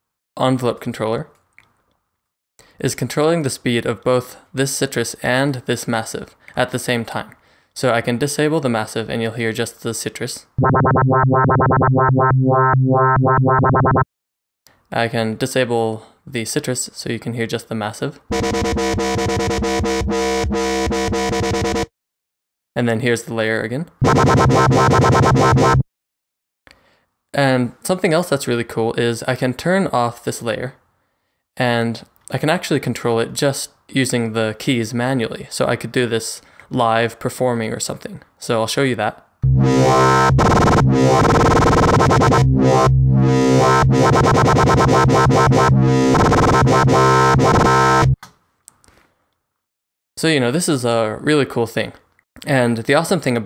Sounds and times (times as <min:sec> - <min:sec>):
Speech: 0:00.4 - 0:01.4, 0:02.8 - 0:10.5, 0:14.9 - 0:18.2, 0:22.8 - 0:24.0, 0:27.4 - 0:30.8, 0:31.6 - 0:39.3, 0:50.2 - 0:53.4
Dubstep: 0:10.6 - 0:14.0, 0:24.0 - 0:25.8, 0:39.5 - 0:48.2.